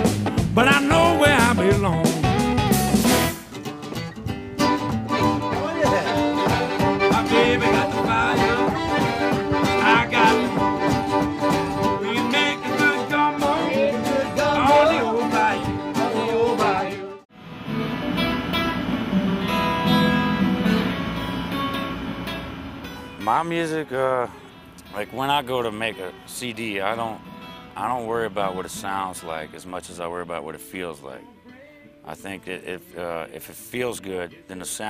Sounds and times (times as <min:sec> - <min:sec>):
Music: 0:00.0 - 0:23.5, 0:24.3 - 0:34.9.